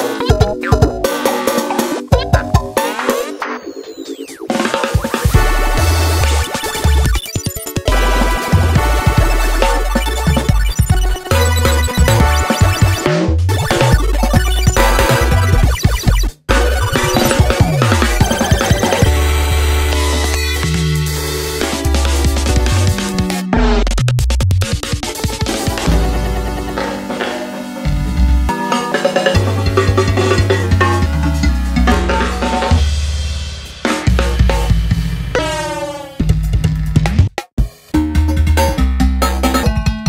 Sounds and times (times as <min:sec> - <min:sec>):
Music: 0:00.0 - 0:40.0.